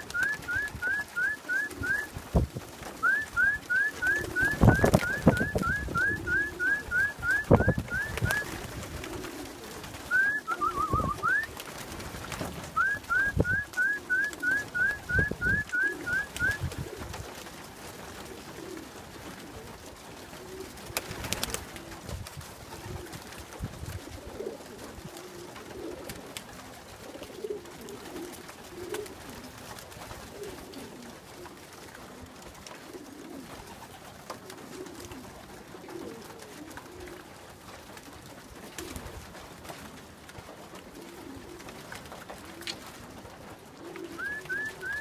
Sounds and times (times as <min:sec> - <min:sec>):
Pigeon, dove: 0:00.0 - 0:45.0.